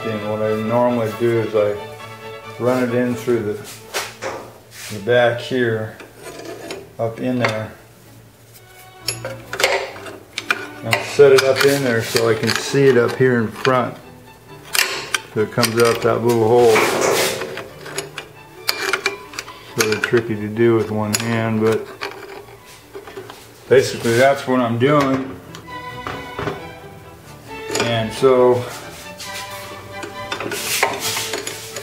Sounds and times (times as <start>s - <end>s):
Speech: 0.0s - 1.8s, 2.6s - 3.7s, 4.9s - 6.0s, 7.0s - 7.8s, 10.8s - 14.0s, 15.4s - 17.2s, 19.8s - 21.9s, 23.7s - 25.4s, 27.7s - 28.8s
Music: 0.0s - 31.8s.